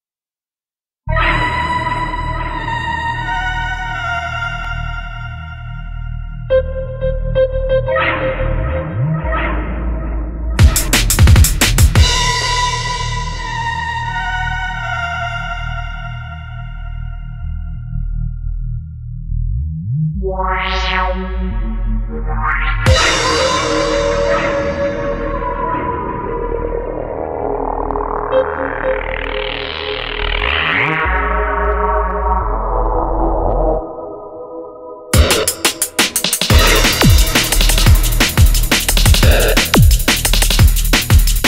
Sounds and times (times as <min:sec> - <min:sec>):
Drum and bass: 0:06.5 - 0:14.9, 0:20.2 - 0:33.8, 0:35.2 - 0:41.4.